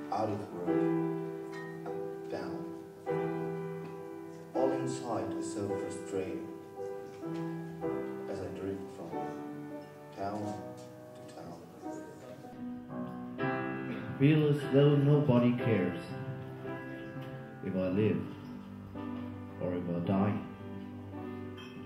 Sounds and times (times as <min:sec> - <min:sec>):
Speech: 0:00.0 - 0:00.9, 0:04.6 - 0:06.5, 0:10.2 - 0:10.7, 0:14.2 - 0:16.1, 0:17.6 - 0:18.3, 0:19.6 - 0:20.5
Music: 0:00.0 - 0:21.8.